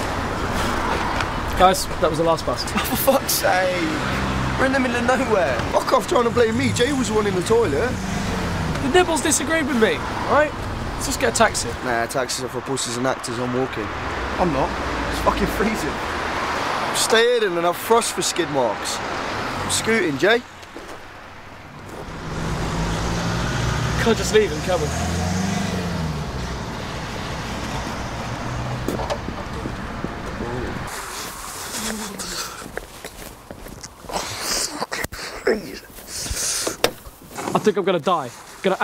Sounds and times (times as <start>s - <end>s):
Vehicle: 0.0s - 38.8s.